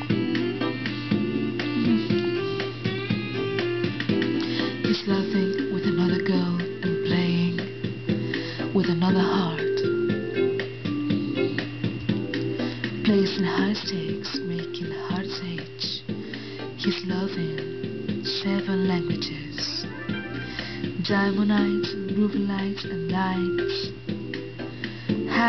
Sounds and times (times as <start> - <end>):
Music: 0.0 - 25.4.